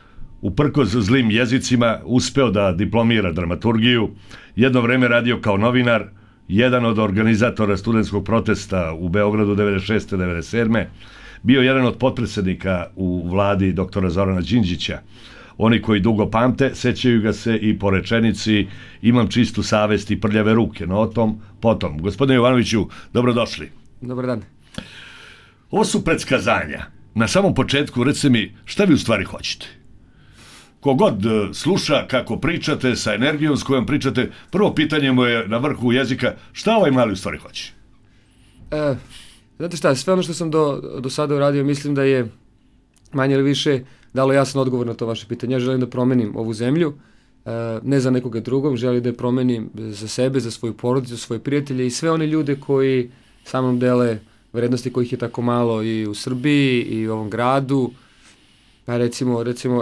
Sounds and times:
Speech: 0.4 - 24.5, 25.7 - 29.8, 30.8 - 37.8, 38.7 - 42.4, 43.0 - 58.0, 58.9 - 59.8.

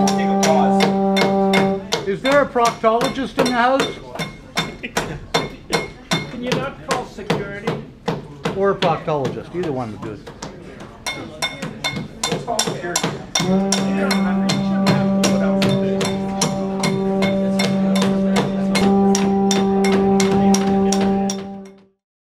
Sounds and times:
Male speech, man speaking: 0.0 - 4.3, 6.2 - 21.5
Music: 0.0 - 4.7, 11.1 - 22.0.

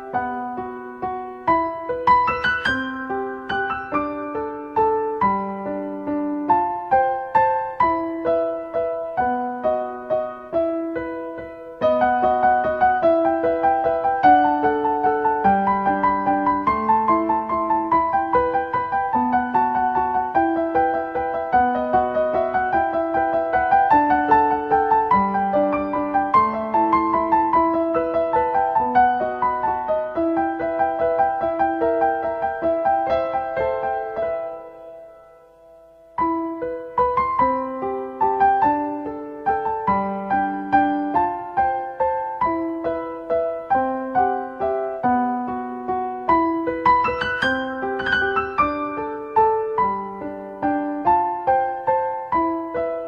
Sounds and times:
Music: 0.0 - 53.0.

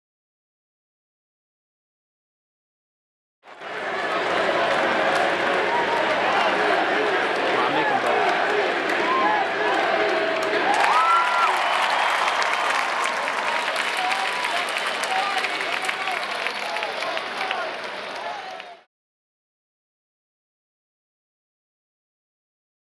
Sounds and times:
Speech: 4.1 - 8.3, 13.8 - 18.9.

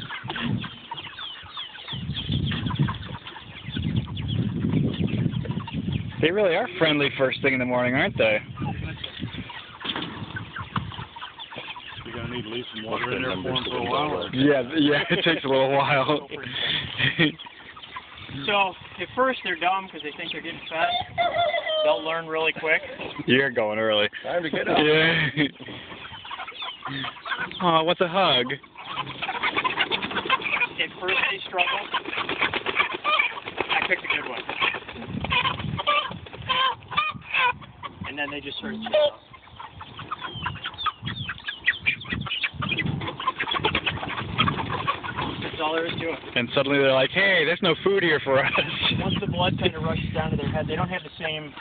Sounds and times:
Cluck: 0.0 - 51.6.

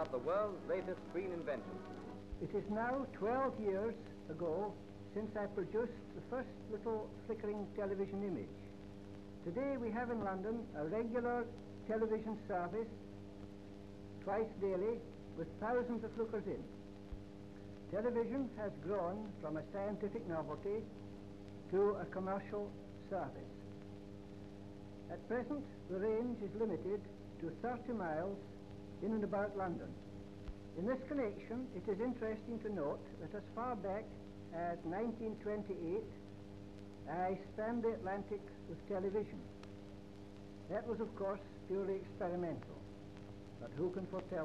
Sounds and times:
Speech: 0.0 - 8.7, 9.4 - 13.0, 14.2 - 16.7, 17.9 - 21.0, 21.7 - 23.6, 25.1 - 28.4, 29.0 - 30.0, 30.8 - 36.2, 37.1 - 39.5, 40.7 - 42.9, 43.6 - 44.4.

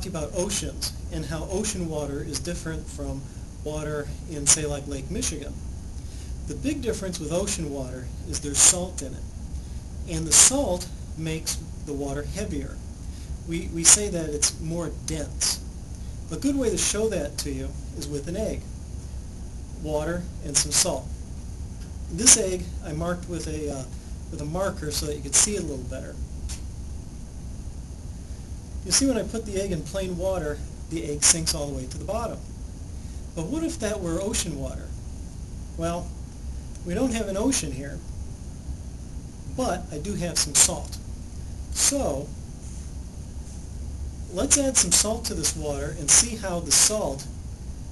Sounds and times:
Speech: 0.0 - 5.6, 6.5 - 9.2, 10.1 - 12.8, 13.5 - 15.6, 16.3 - 18.6, 19.8 - 21.1, 22.1 - 26.2, 28.9 - 32.4, 33.4 - 35.0, 35.8 - 36.1, 36.8 - 38.0, 39.5 - 41.0, 41.8 - 42.4, 44.3 - 47.3.

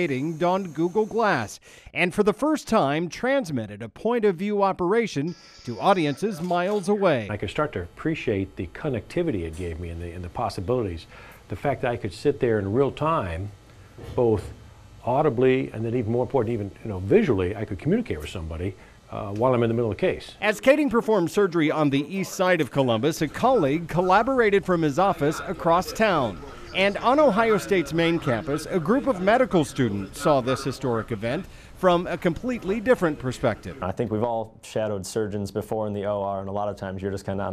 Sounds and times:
Speech: 0.0 - 37.5.

